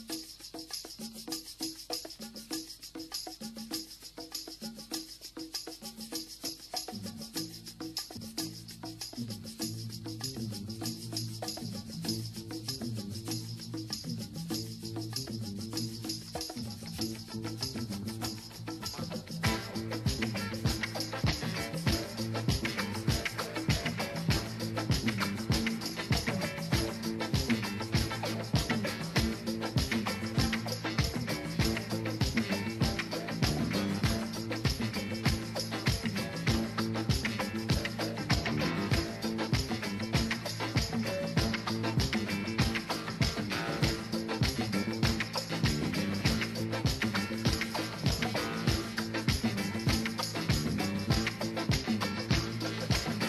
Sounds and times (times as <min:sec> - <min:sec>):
Music: 0:00.0 - 0:53.2.